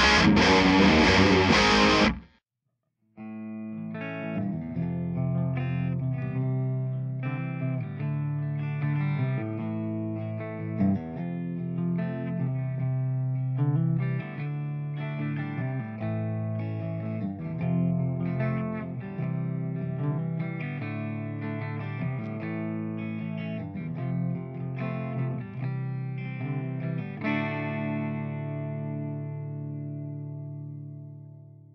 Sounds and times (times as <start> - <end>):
Music: 0.0 - 2.4, 3.2 - 31.7.